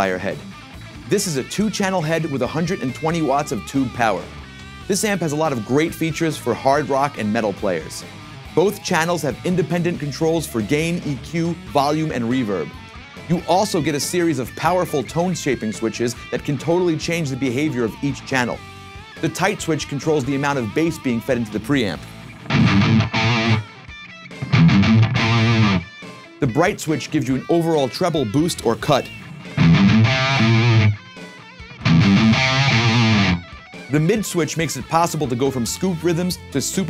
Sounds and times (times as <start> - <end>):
Speech: 0.0 - 0.5, 1.1 - 18.6, 19.2 - 22.1, 26.4 - 29.2, 33.9 - 36.8
Electric guitar: 0.0 - 6.2, 6.8 - 34.7.